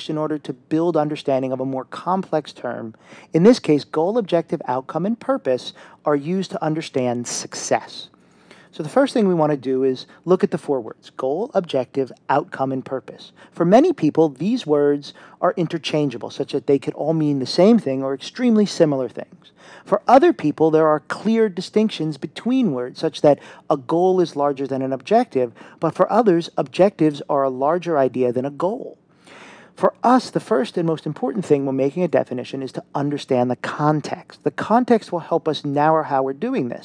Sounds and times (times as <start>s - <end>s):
Speech: 0.0s - 8.1s, 8.7s - 29.0s, 29.8s - 36.8s.